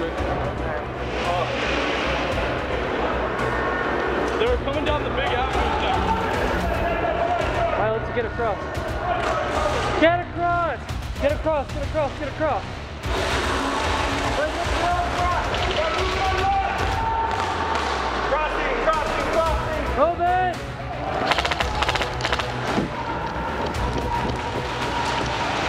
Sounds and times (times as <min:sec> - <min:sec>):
Music: 0:00.0 - 0:25.6.